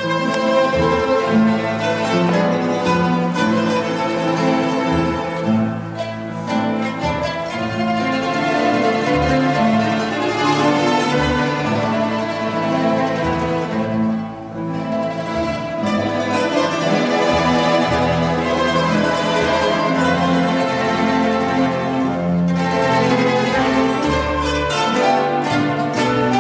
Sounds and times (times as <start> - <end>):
Acoustic guitar: 0.0 - 26.4
Orchestra: 0.0 - 26.4
Strum: 0.0 - 26.4.